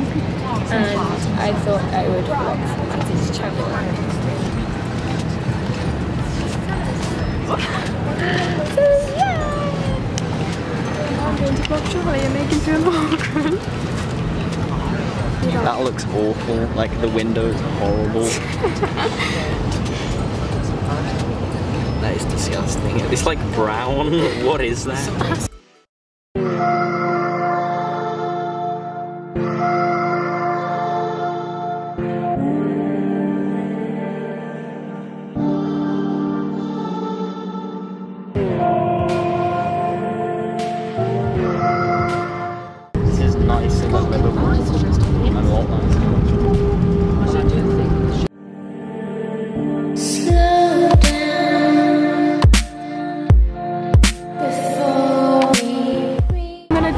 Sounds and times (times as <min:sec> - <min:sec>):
Music: 0:00.0 - 0:23.4, 0:25.0 - 0:56.9
Speech: 0:43.0 - 0:46.0, 0:56.7 - 0:56.9.